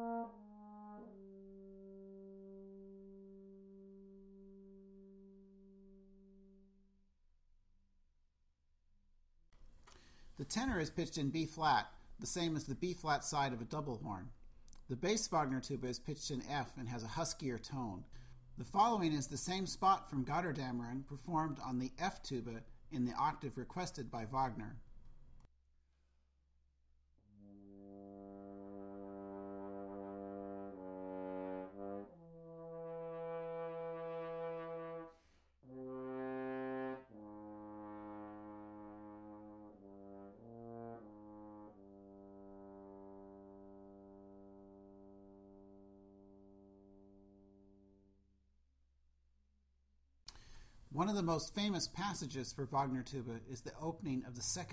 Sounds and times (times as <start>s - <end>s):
French horn: 0.0s - 6.9s, 27.2s - 48.3s
Speech: 10.4s - 24.8s, 50.9s - 54.7s.